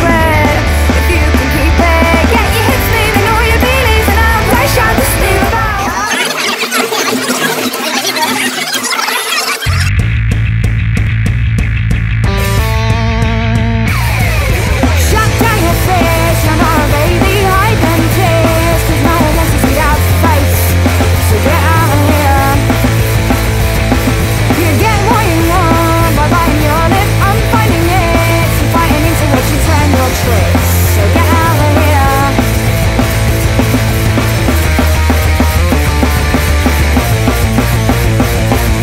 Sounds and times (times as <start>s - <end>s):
Funk: 0.0s - 38.8s.